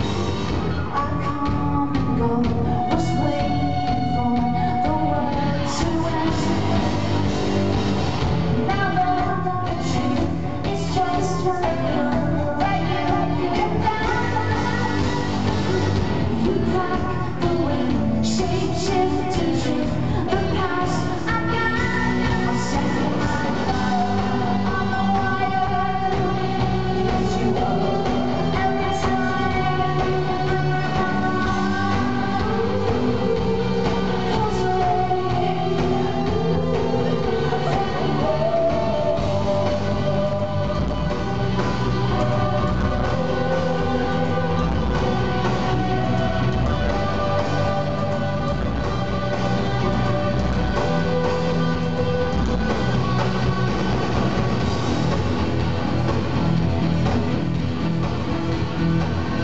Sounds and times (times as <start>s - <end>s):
Music: 0.0s - 59.4s.